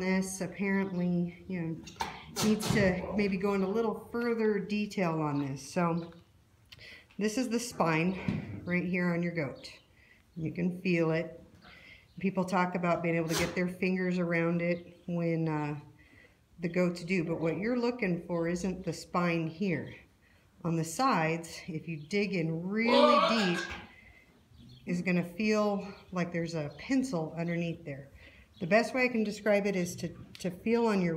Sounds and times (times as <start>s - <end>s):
Speech: 0.0s - 6.1s, 20.7s - 23.8s, 24.9s - 31.1s.